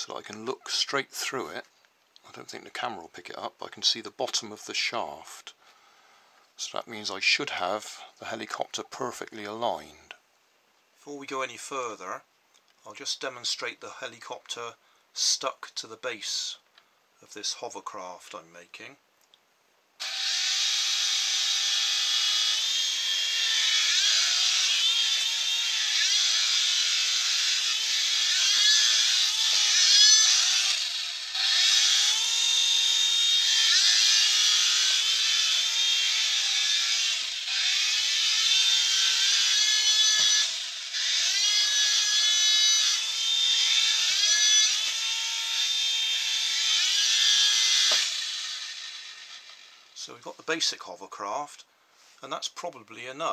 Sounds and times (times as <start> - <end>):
Speech: 0.0 - 5.6, 6.6 - 10.2, 11.0 - 19.0, 50.0 - 53.3
Inside, small room: 0.0 - 53.3.